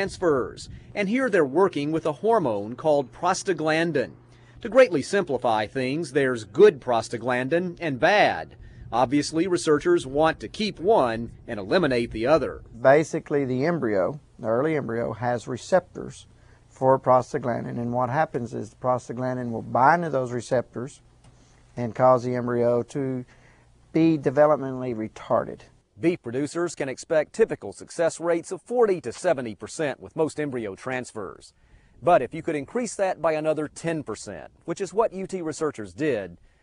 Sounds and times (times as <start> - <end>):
Speech: 0.0 - 21.0, 21.8 - 23.3, 23.9 - 36.4.